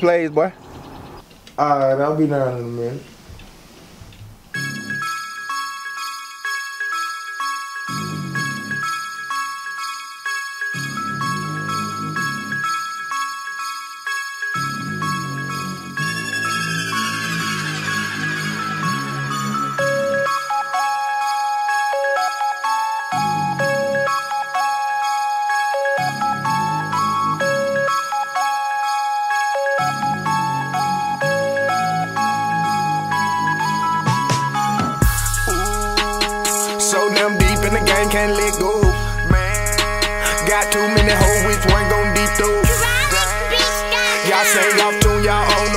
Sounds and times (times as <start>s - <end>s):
Music: 4.5s - 45.7s.